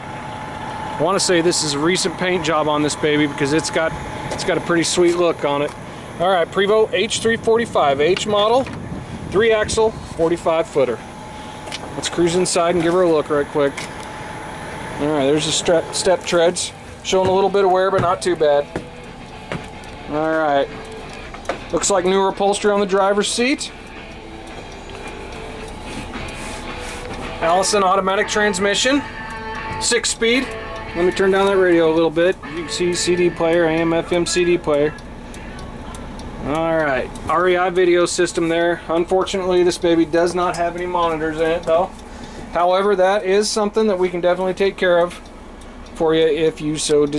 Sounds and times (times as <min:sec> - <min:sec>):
Bus: 0:00.0 - 0:47.1
Speech: 0:01.0 - 0:08.7, 0:09.3 - 0:11.0, 0:12.0 - 0:13.8, 0:15.0 - 0:18.7, 0:20.1 - 0:20.8, 0:21.7 - 0:23.8, 0:27.4 - 0:29.0, 0:29.8 - 0:41.9, 0:42.6 - 0:45.2, 0:46.0 - 0:47.1.